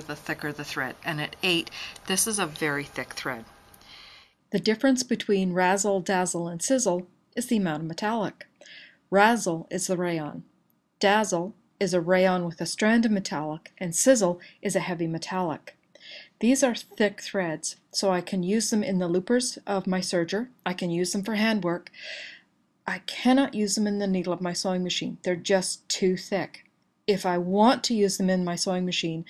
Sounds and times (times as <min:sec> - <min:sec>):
Speech: 0:00.0 - 0:03.5, 0:04.6 - 0:08.5, 0:09.2 - 0:10.4, 0:11.0 - 0:15.7, 0:16.3 - 0:22.0, 0:22.9 - 0:29.2.